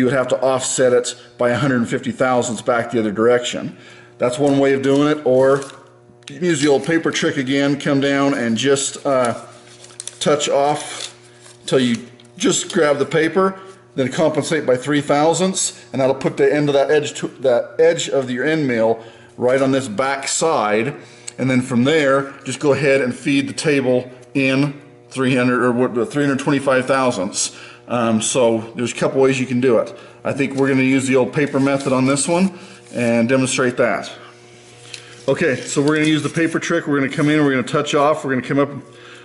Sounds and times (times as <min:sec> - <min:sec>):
Speech: 0:00.0 - 0:09.5, 0:10.2 - 0:11.1, 0:11.7 - 0:34.2, 0:35.3 - 0:38.9.